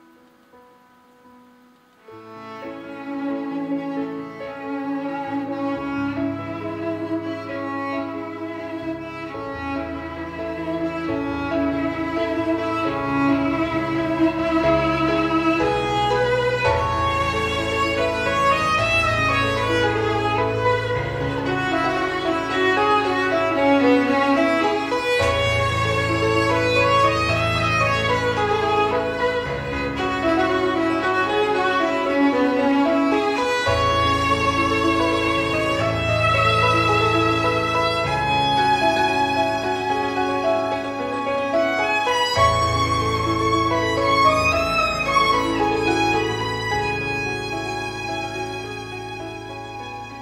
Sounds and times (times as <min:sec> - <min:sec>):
Piano: 0:00.0 - 0:50.2
Violin, fiddle: 0:02.0 - 0:50.2.